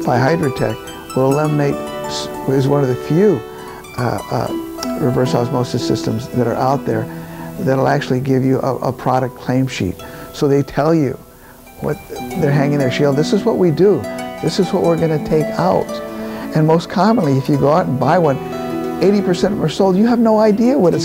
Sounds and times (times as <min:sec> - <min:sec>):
Speech: 0:00.0 - 0:03.4, 0:04.0 - 0:11.2, 0:11.8 - 0:18.4, 0:19.0 - 0:21.0
Music: 0:00.0 - 0:21.0.